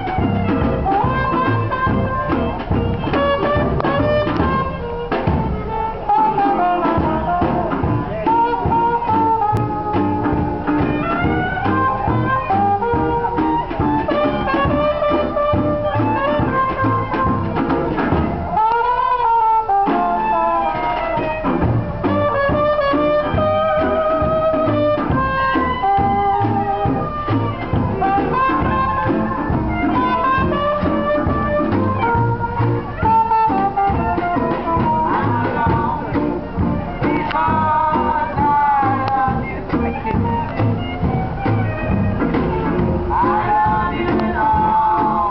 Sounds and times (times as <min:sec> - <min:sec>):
Blues: 0:00.0 - 0:45.3.